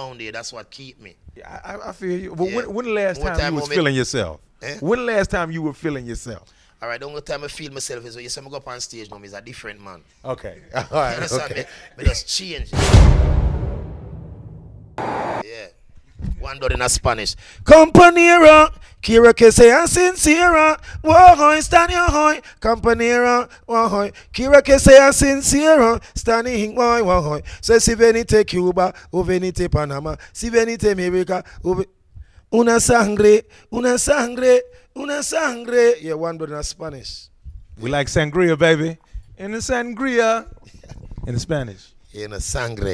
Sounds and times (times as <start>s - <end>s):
Speech: 0.0s - 12.8s, 15.4s - 25.6s, 32.6s - 42.9s.